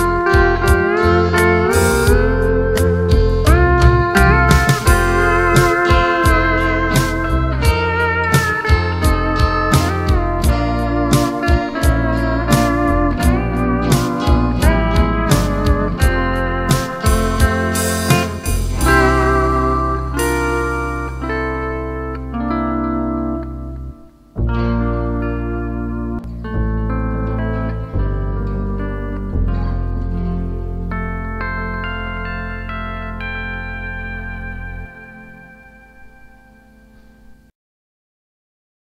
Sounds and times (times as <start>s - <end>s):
Steel guitar, slide guitar: 0.0s - 37.4s.